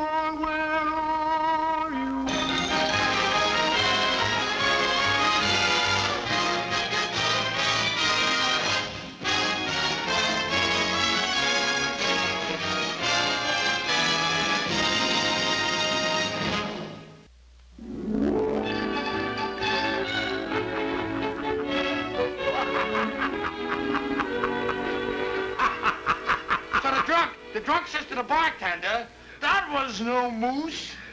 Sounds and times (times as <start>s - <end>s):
Music: 0.0s - 28.7s
Speech: 26.8s - 31.0s.